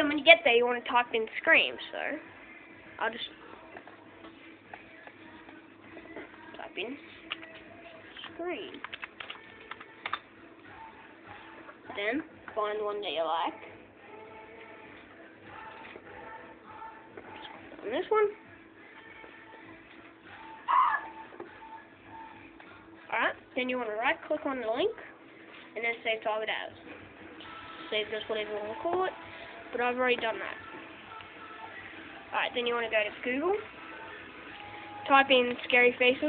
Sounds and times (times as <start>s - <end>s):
Speech: 0.0s - 2.2s, 11.9s - 13.6s, 17.8s - 18.4s, 25.8s - 26.8s, 29.8s - 30.6s, 32.3s - 33.7s, 35.1s - 36.2s
Music: 0.0s - 36.2s.